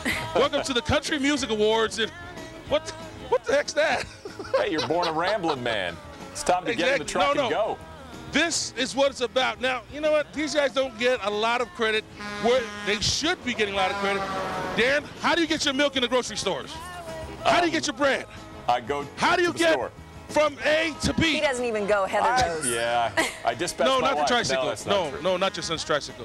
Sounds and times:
Music: 0.0s - 26.2s
Speech: 3.4s - 7.8s, 17.5s - 26.2s.

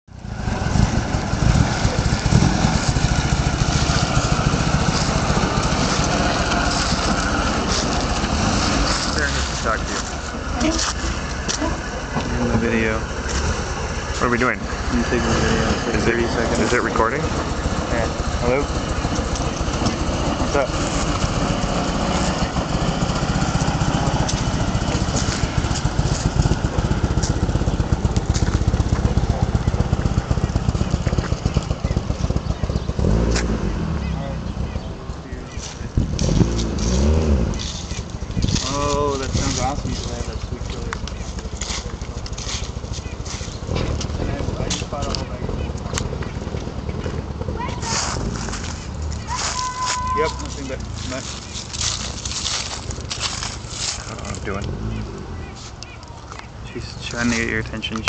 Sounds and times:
Speech: 38.6s - 41.1s, 44.2s - 46.0s, 54.0s - 55.2s, 56.7s - 58.0s.

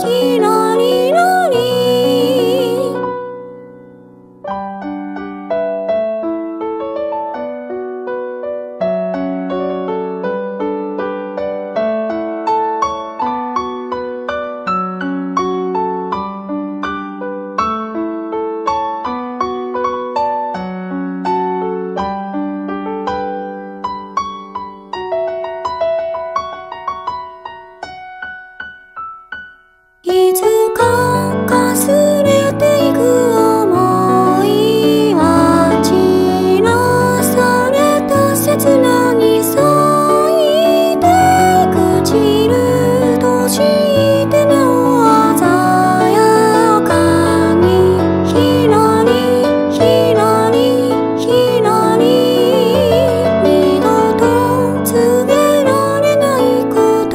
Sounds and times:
Music: 0.0s - 57.1s.

